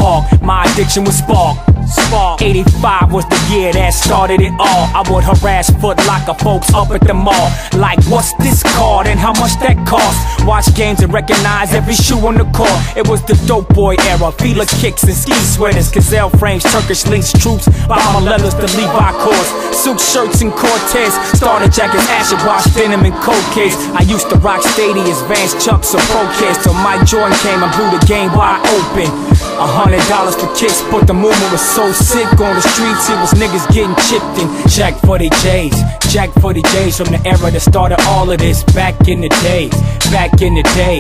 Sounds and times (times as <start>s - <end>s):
Music: 0.0s - 41.0s.